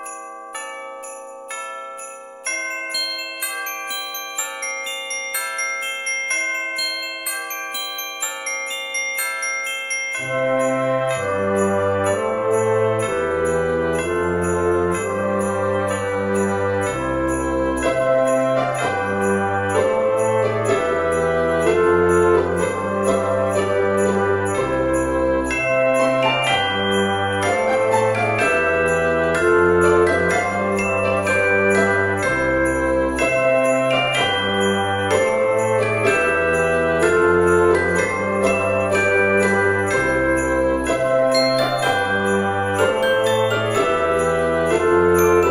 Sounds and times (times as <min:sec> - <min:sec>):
Glockenspiel: 0:00.0 - 0:45.5.